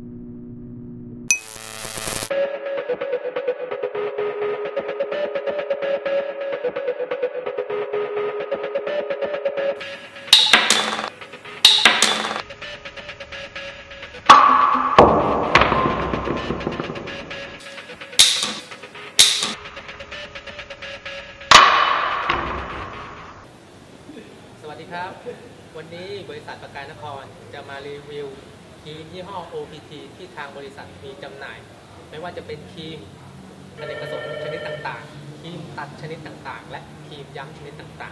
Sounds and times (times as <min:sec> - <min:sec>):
Speech: 0:24.1 - 0:33.1, 0:34.4 - 0:38.1.